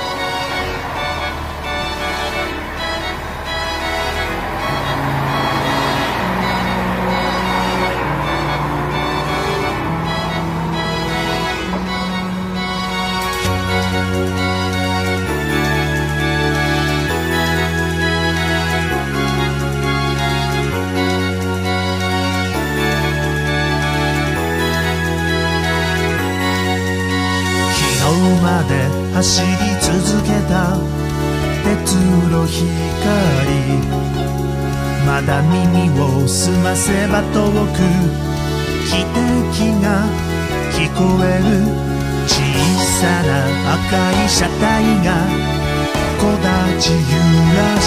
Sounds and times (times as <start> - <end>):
Music: 0.0 - 47.8.